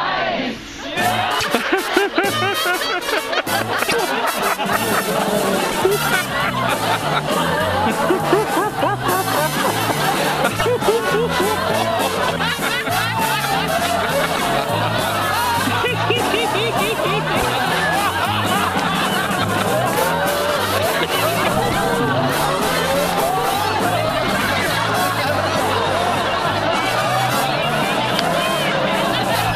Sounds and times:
Music: 0.4s - 29.5s
Snicker: 1.0s - 29.5s.

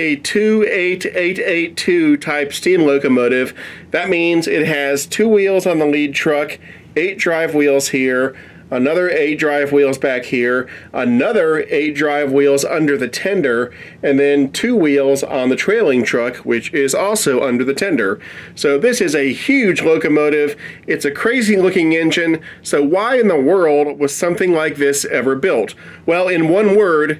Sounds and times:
Speech: 0.0s - 27.1s.

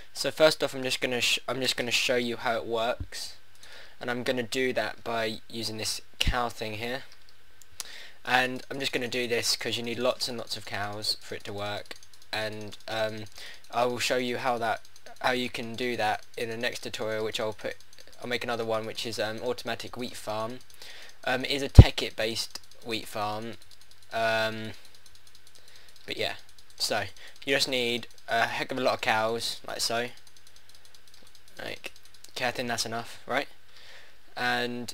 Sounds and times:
Speech: 0.2s - 3.4s, 4.0s - 7.1s, 8.3s - 20.6s, 21.2s - 23.6s, 24.2s - 24.8s, 26.1s - 30.2s, 31.6s - 33.5s, 34.4s - 34.9s.

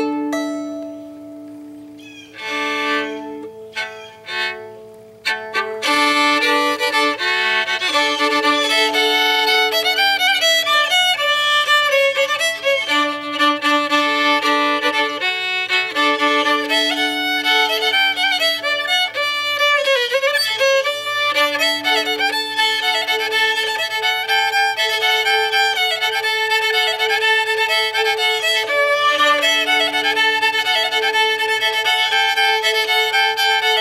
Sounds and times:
Violin, fiddle: 0.0s - 33.8s.

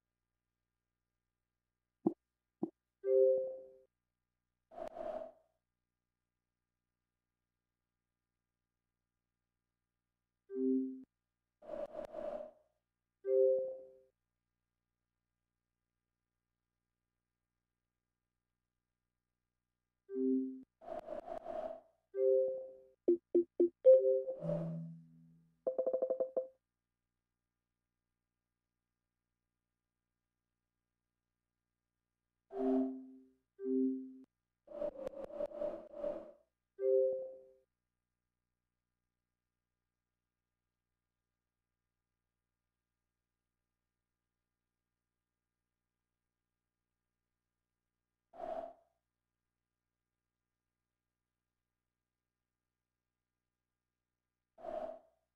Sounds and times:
Music: 3.1s - 3.9s, 10.5s - 11.1s, 13.3s - 14.1s, 20.1s - 20.6s, 22.2s - 26.4s, 32.7s - 34.2s, 36.8s - 37.6s.

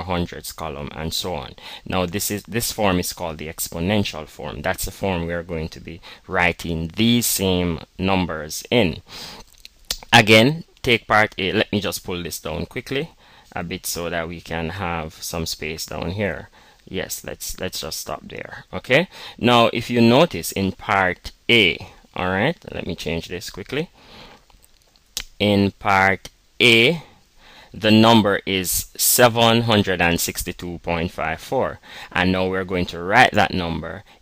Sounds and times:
Speech: 0.0s - 9.1s, 9.9s - 23.9s, 25.2s - 27.1s, 27.8s - 34.1s.

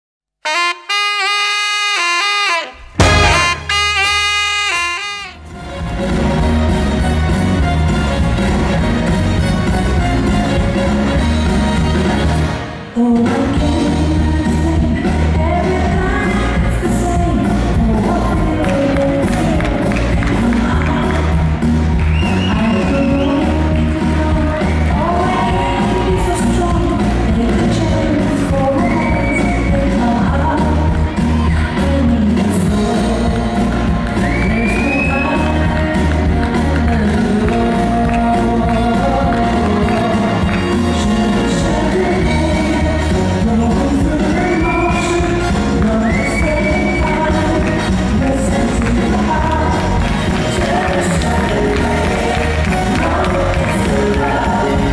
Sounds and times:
Inside, large room or hall: 0.4s - 54.9s
Music: 0.4s - 54.9s.

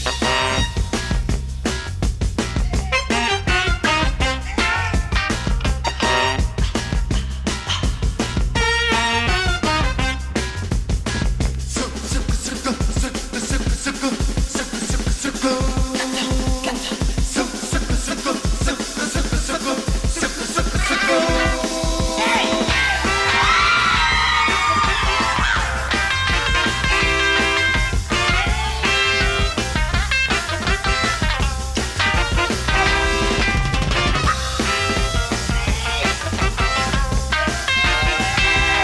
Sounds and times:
Music: 0.0s - 38.8s.

